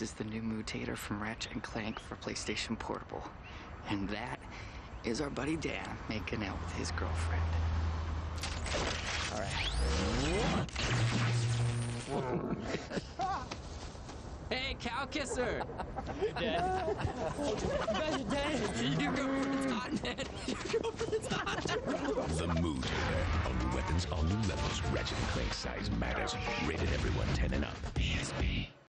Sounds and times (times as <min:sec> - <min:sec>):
Speech: 0:00.0 - 0:04.4, 0:05.0 - 0:07.6, 0:18.0 - 0:28.8
Music: 0:22.8 - 0:28.8.